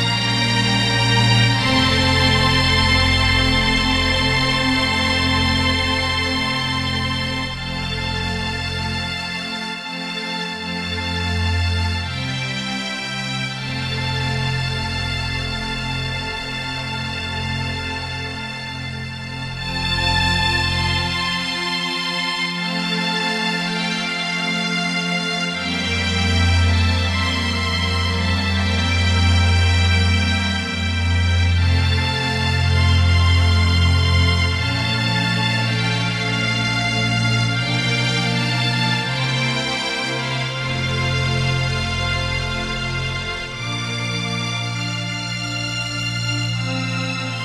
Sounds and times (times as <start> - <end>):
Music: 0.0 - 47.4.